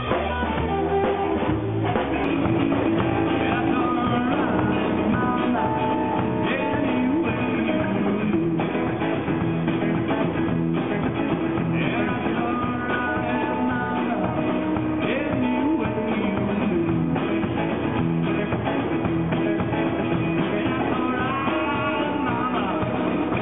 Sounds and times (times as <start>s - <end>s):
Guitar: 0.0s - 23.4s
Singing: 1.9s - 8.6s, 11.8s - 17.0s, 19.4s - 23.4s.